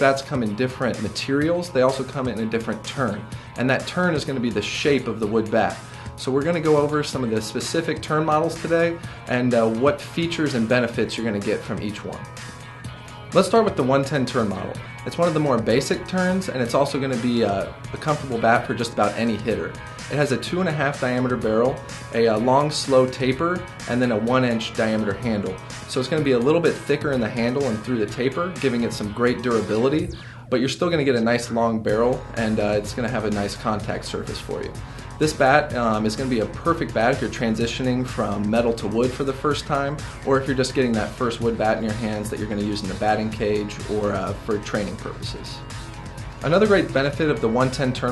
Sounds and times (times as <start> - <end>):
Speech: 0.0 - 12.3, 13.4 - 45.6, 46.4 - 48.1
Music: 0.0 - 48.1.